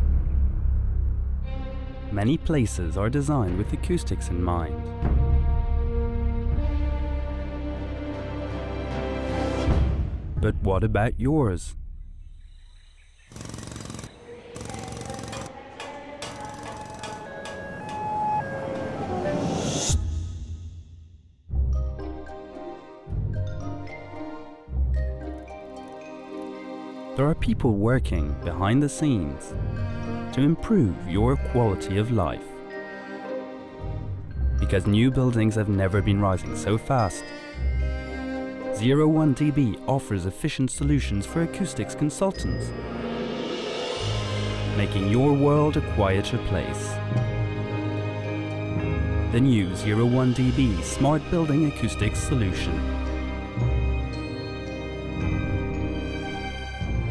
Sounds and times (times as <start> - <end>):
Music: 0.0 - 12.5, 13.3 - 57.1
Speech: 2.1 - 4.8, 10.4 - 11.8, 27.2 - 29.6, 30.3 - 32.5, 34.6 - 37.3, 38.8 - 42.7, 44.7 - 47.0, 49.3 - 52.8.